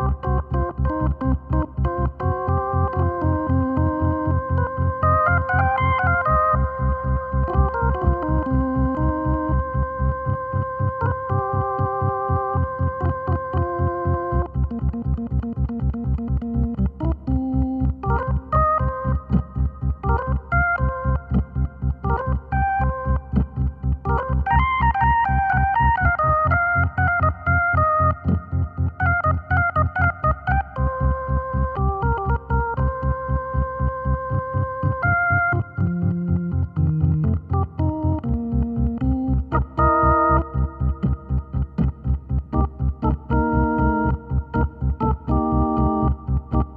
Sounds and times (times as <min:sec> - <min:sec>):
Electronic organ: 0:00.0 - 0:46.7.